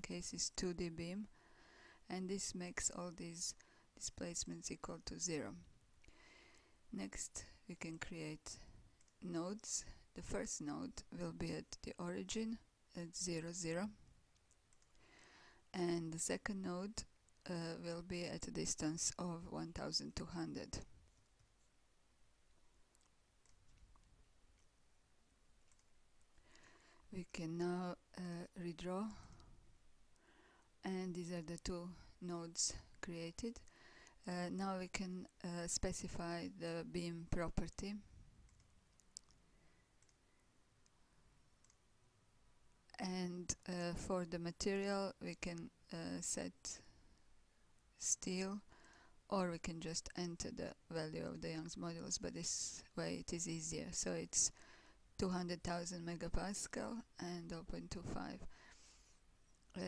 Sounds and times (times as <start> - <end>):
Speech: 0.0 - 1.3, 2.1 - 5.6, 7.0 - 14.0, 15.8 - 20.9, 27.1 - 29.3, 30.8 - 33.6, 34.2 - 38.0, 42.9 - 46.8, 48.0 - 48.6, 49.3 - 54.5, 55.2 - 58.5
Inside, small room: 0.0 - 59.8.